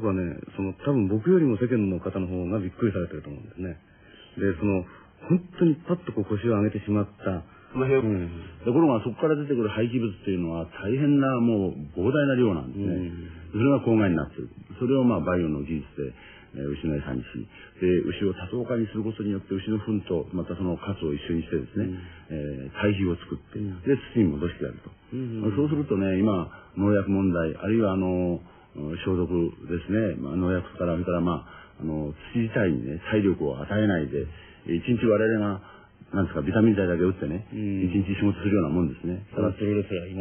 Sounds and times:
Male speech, man speaking: 0:00.0 - 0:40.2
Narration, monologue: 0:00.0 - 0:40.2.

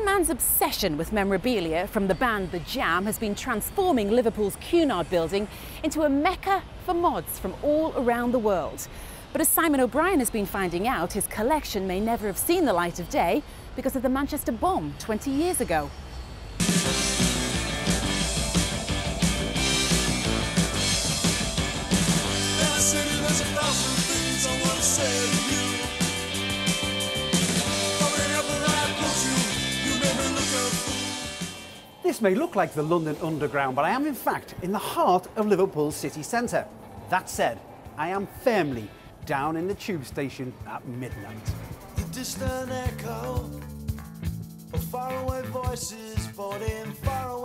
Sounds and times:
Speech: 0:00.0 - 0:15.9, 0:32.1 - 0:41.6
Music: 0:16.6 - 0:33.6, 0:39.8 - 0:47.4.

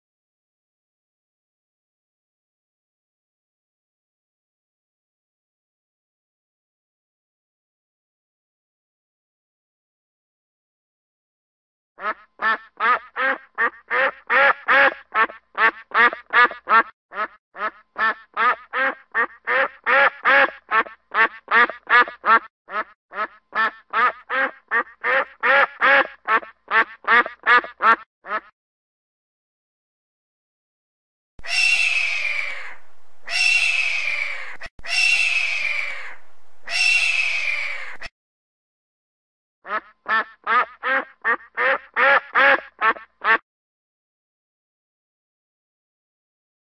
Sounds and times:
Goose: 0:12.0 - 0:28.5, 0:31.4 - 0:38.1, 0:39.6 - 0:43.4
Bird: 0:31.4 - 0:38.1.

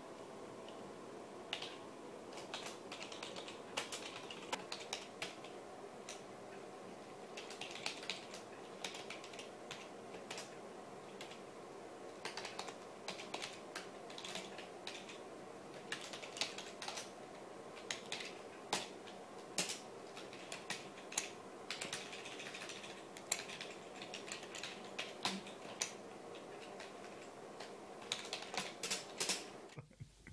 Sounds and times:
Computer keyboard: 0:01.5 - 0:06.2, 0:07.4 - 0:10.5, 0:11.1 - 0:11.4, 0:12.2 - 0:17.2, 0:17.8 - 0:29.6.

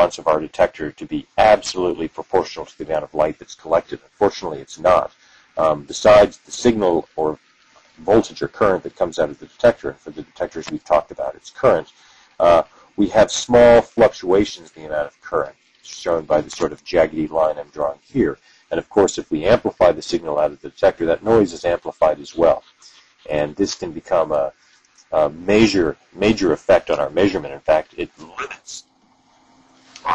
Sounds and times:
Speech: 0:00.0 - 0:07.4, 0:08.0 - 0:28.8.

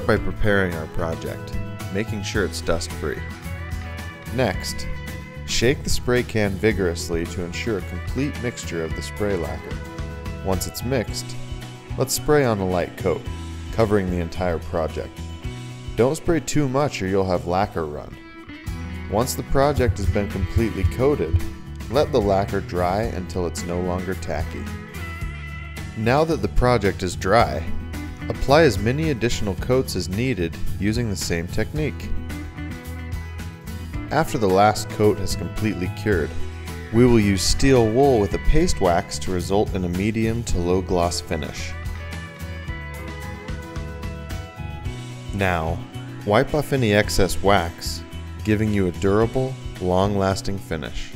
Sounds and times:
Speech: 0:00.0 - 0:03.2, 0:04.3 - 0:04.9, 0:05.5 - 0:09.8, 0:10.4 - 0:11.4, 0:12.0 - 0:15.1, 0:16.0 - 0:18.2, 0:19.1 - 0:24.7, 0:26.0 - 0:32.1, 0:34.1 - 0:41.8, 0:45.3 - 0:51.1
Music: 0:00.0 - 0:51.1.

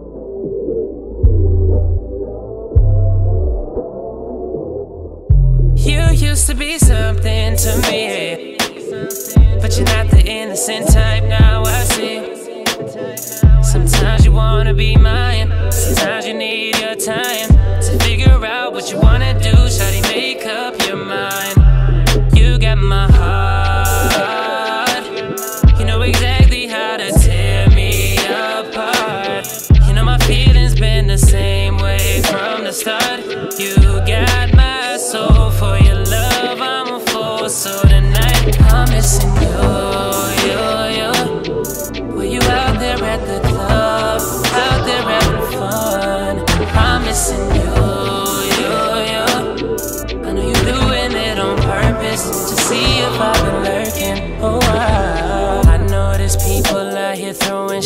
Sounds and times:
Music: 0:00.0 - 0:57.8.

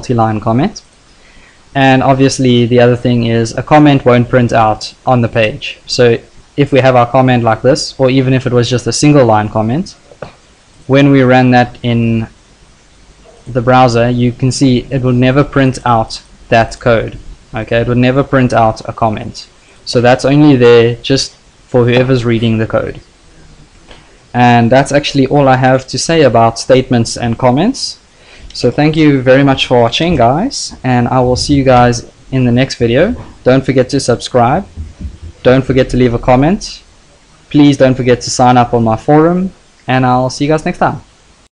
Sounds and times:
Speech: 0:00.0 - 0:00.9, 0:01.8 - 0:10.0, 0:10.9 - 0:12.4, 0:13.3 - 0:23.6, 0:24.3 - 0:36.9, 0:37.5 - 0:41.1.

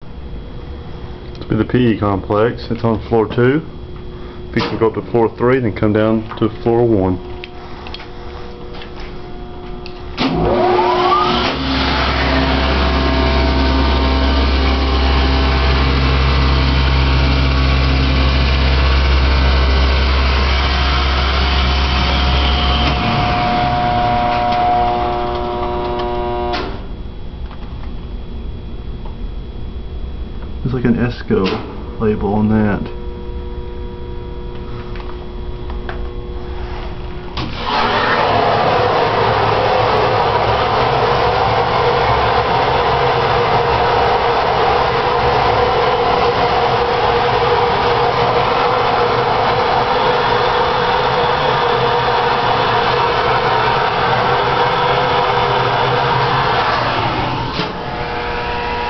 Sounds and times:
Speech: 0:01.4 - 0:03.7, 0:04.6 - 0:07.2, 0:30.6 - 0:33.0.

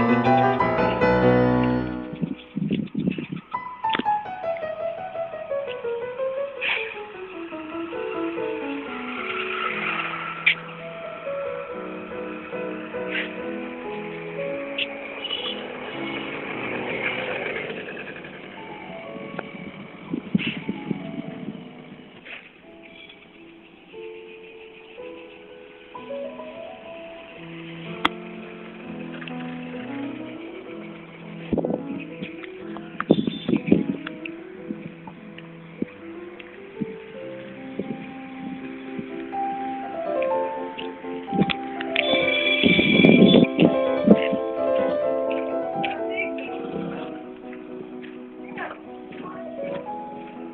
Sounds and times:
Music: 0:00.0 - 0:17.0, 0:18.4 - 0:50.5
Outside, rural or natural: 0:00.1 - 0:50.5.

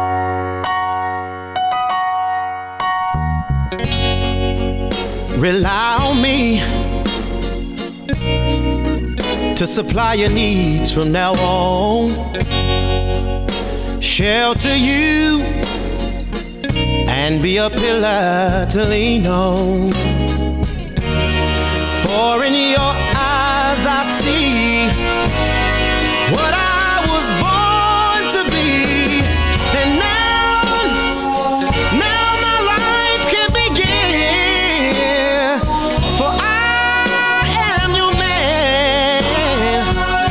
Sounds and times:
Singing: 0:26.2 - 0:40.3.

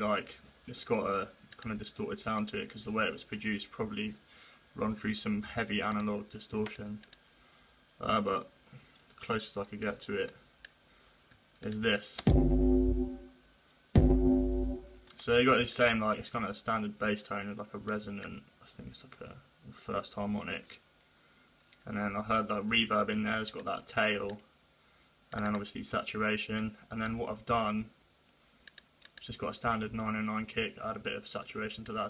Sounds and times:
Speech: 0:00.0 - 0:04.2, 0:04.8 - 0:07.0, 0:08.0 - 0:08.6, 0:09.2 - 0:10.4, 0:11.6 - 0:12.3, 0:15.2 - 0:20.8, 0:21.8 - 0:24.5, 0:25.4 - 0:28.0, 0:29.2 - 0:32.0.

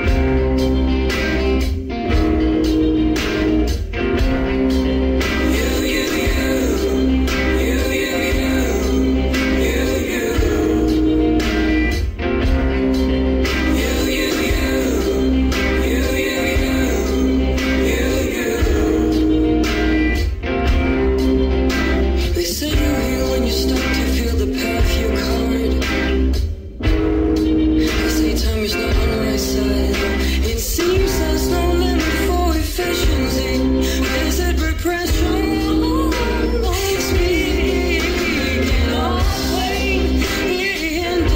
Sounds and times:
Blues: 0:00.0 - 0:41.3.

